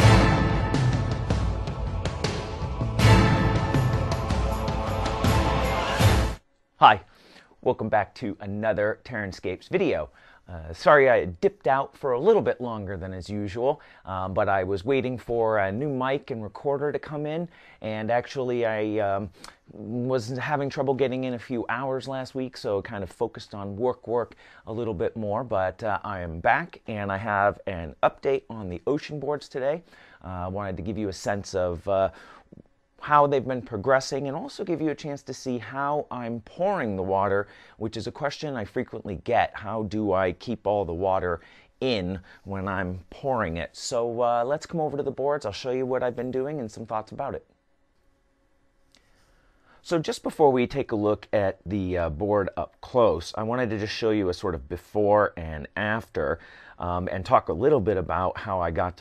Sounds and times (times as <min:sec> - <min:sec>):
Speech: 0:06.8 - 0:32.2, 0:33.0 - 0:47.5, 0:49.8 - 0:59.0.